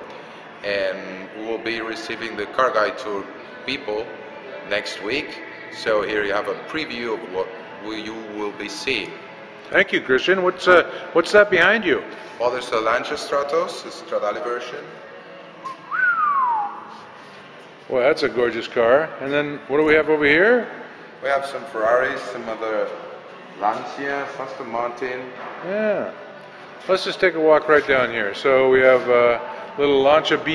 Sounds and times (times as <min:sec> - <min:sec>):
Speech: 0:00.6 - 0:09.1, 0:26.9 - 0:30.5.